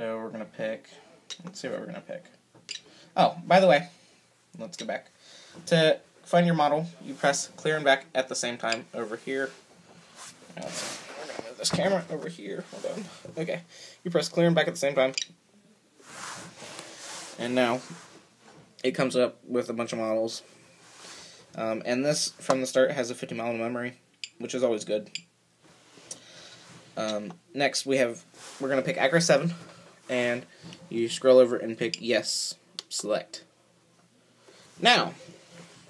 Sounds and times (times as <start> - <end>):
Speech: 0.0 - 2.3, 3.2 - 3.9, 4.6 - 5.1, 5.7 - 9.6, 10.6 - 15.2, 17.4 - 17.9, 18.8 - 20.5, 21.6 - 25.2, 27.0 - 33.5, 34.8 - 35.3.